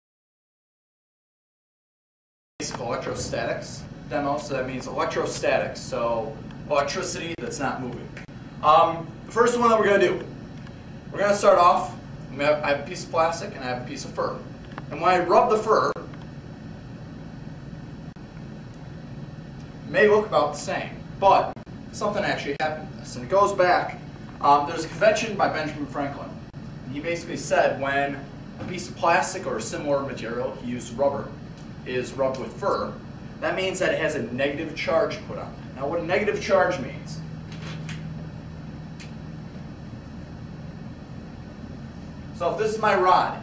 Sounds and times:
Speech: 0:02.6 - 0:10.3, 0:11.2 - 0:16.1, 0:19.9 - 0:37.3, 0:42.4 - 0:43.4.

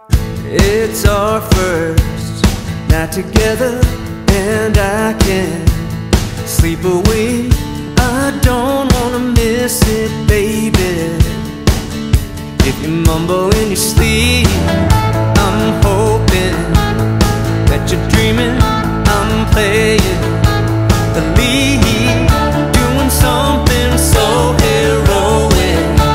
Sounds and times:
Music: 0:00.0 - 0:26.1.

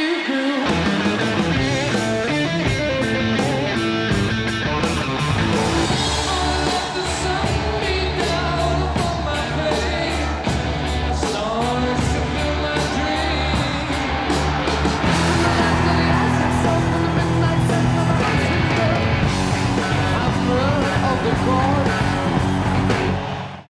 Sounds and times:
Music: 0:00.0 - 0:23.7.

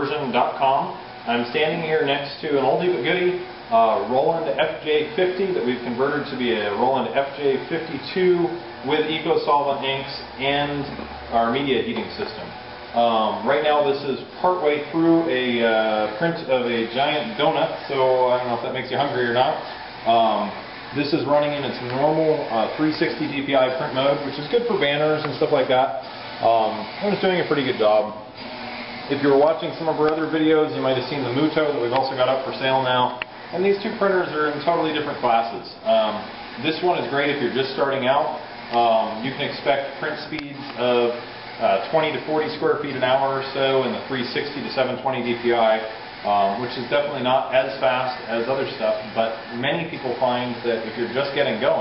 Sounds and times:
Speech: 0:00.0 - 0:28.3, 0:29.1 - 0:51.8
Printer: 0:00.0 - 0:51.8.

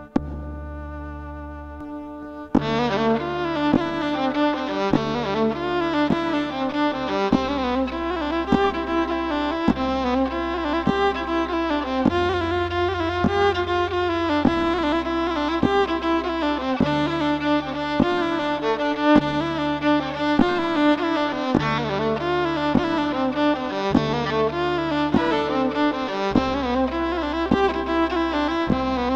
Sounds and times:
Violin, fiddle: 0:00.0 - 0:29.1.

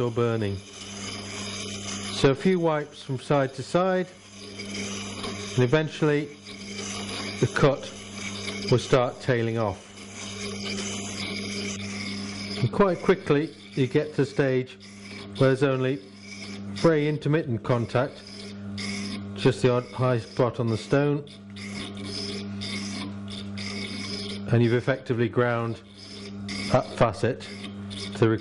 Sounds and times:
Speech: 0:00.0 - 0:00.6, 0:02.2 - 0:04.1, 0:05.6 - 0:06.3, 0:07.4 - 0:07.9, 0:08.7 - 0:09.8, 0:12.6 - 0:14.8, 0:15.4 - 0:16.0, 0:16.8 - 0:18.2, 0:19.4 - 0:21.3, 0:24.5 - 0:25.8, 0:26.7 - 0:27.5, 0:28.2 - 0:28.4.

